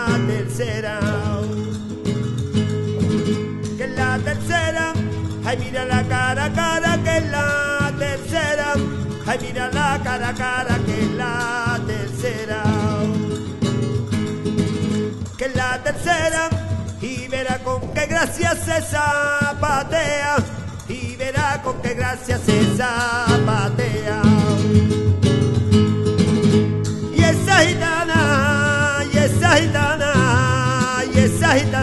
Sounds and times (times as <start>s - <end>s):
Music: 0.0s - 31.8s.